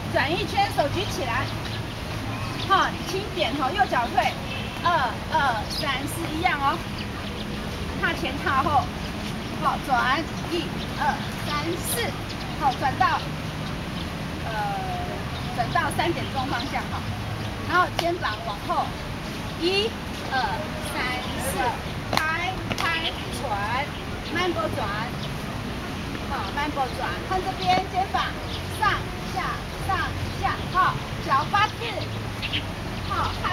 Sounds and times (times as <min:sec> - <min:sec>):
Speech: 0:00.0 - 0:01.6, 0:02.5 - 0:06.9, 0:08.0 - 0:08.9, 0:09.6 - 0:13.3, 0:14.4 - 0:19.0, 0:19.6 - 0:25.2, 0:26.3 - 0:32.2, 0:33.1 - 0:33.5.